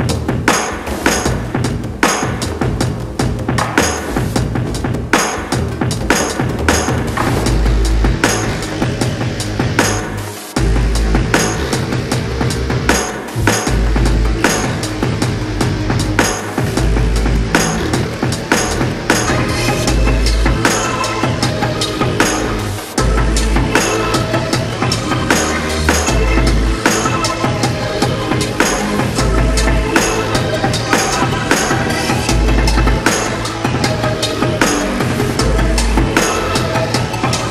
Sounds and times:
Music: 0.0s - 37.5s.

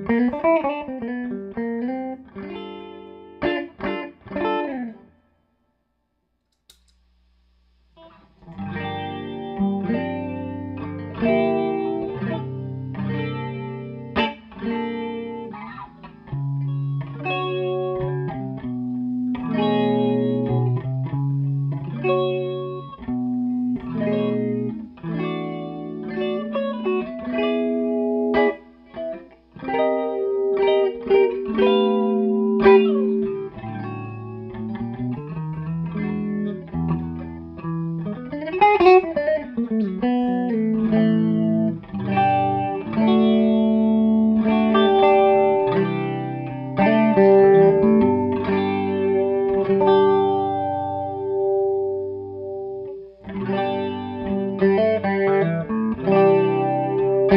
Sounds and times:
Electric guitar: 0.0s - 5.4s, 8.0s - 57.3s
Chorus effect: 0.0s - 57.3s
Distortion: 0.0s - 57.3s.

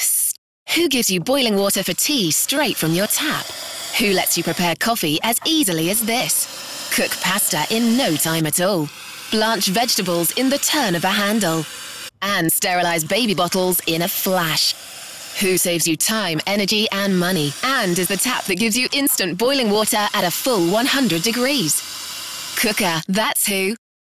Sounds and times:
Speech: 0.0s - 14.8s, 15.4s - 21.8s, 22.6s - 23.8s.

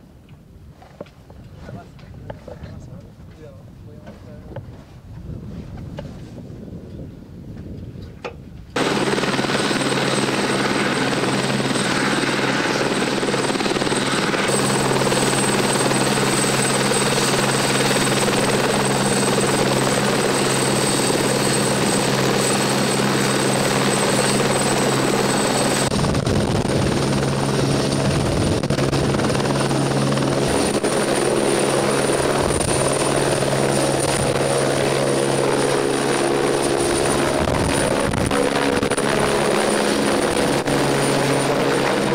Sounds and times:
Helicopter: 6.8s - 42.1s.

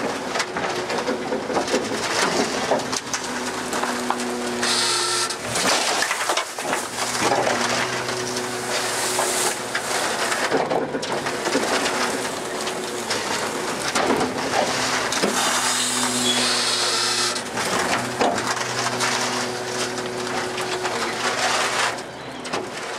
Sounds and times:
Truck: 0.0s - 22.9s.

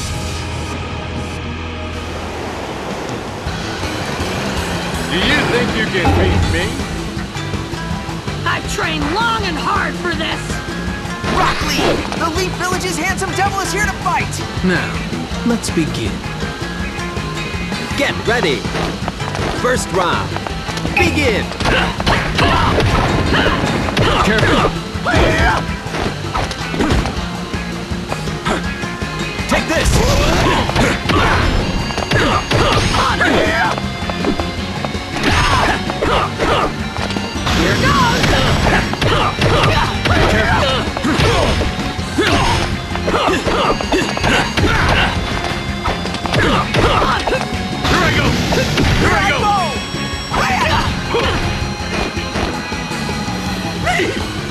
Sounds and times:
Music: 0.0s - 54.5s.

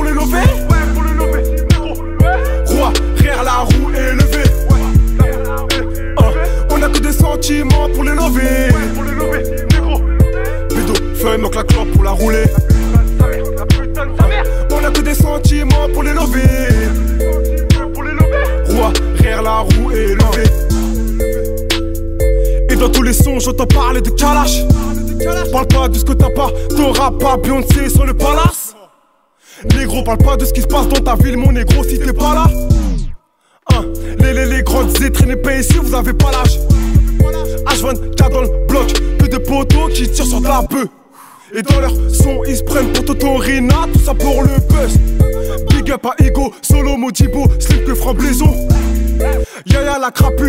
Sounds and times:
Music: 0.0s - 28.6s, 29.6s - 40.9s, 41.5s - 50.4s.

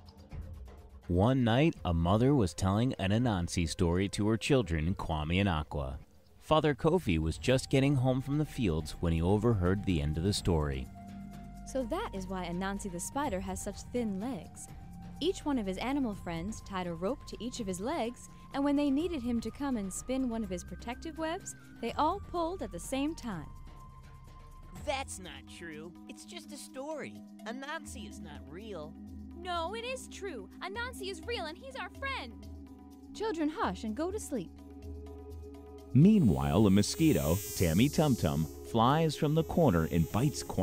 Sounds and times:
Music: 0.0s - 40.6s
Speech: 1.1s - 10.9s, 11.7s - 23.5s, 24.8s - 32.3s, 33.2s - 34.5s, 36.0s - 40.6s.

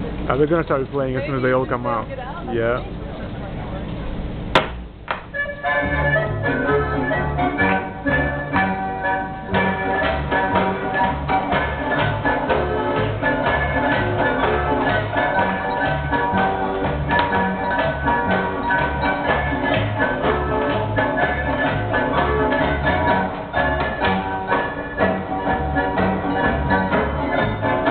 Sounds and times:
Music: 5.2s - 27.9s.

